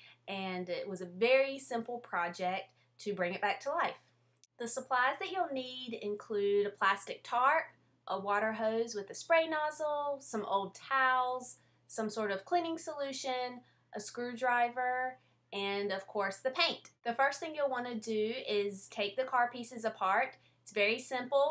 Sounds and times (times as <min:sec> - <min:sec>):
Speech: 0:00.3 - 0:04.0, 0:04.6 - 0:21.5.